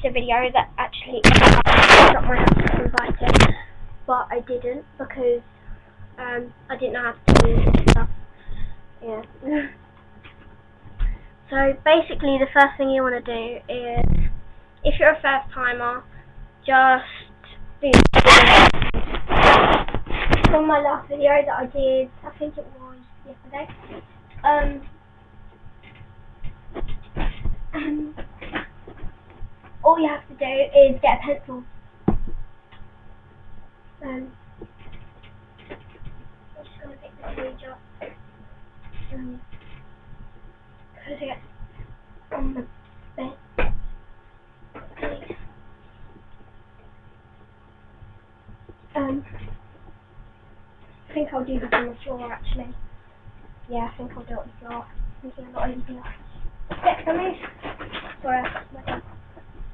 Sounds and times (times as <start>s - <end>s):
Speech: 0.0s - 1.3s, 1.9s - 5.5s, 6.2s - 8.2s, 9.0s - 9.8s, 11.5s - 14.1s, 14.8s - 18.7s, 20.5s - 23.8s, 24.4s - 24.9s, 29.8s - 31.7s, 34.0s - 34.4s, 36.6s - 38.1s, 39.0s - 39.5s, 41.0s - 41.4s, 49.0s - 49.4s, 51.1s - 52.8s, 53.7s - 56.2s, 56.8s - 57.5s, 58.2s - 59.0s.